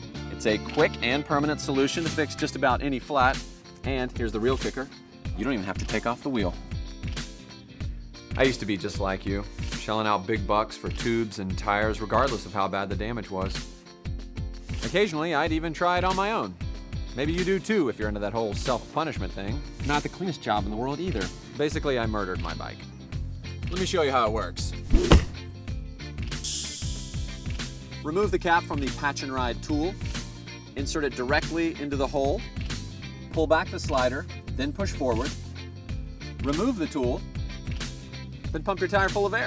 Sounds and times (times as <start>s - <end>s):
Music: 0.0s - 39.4s
Speech: 0.3s - 6.6s, 8.4s - 13.6s, 14.8s - 16.6s, 17.2s - 22.8s, 23.7s - 24.7s, 28.0s - 30.0s, 30.8s - 32.4s, 33.3s - 35.4s, 36.4s - 37.2s, 38.5s - 39.4s.